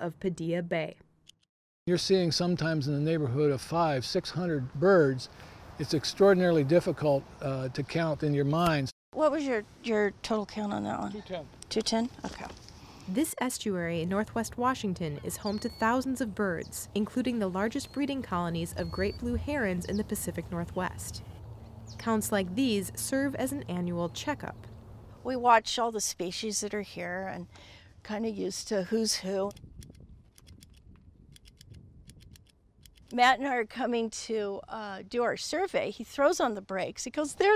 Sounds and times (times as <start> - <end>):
Speech: 1.9 - 12.5, 13.1 - 21.2, 22.0 - 24.6, 28.1 - 29.5, 33.2 - 37.5.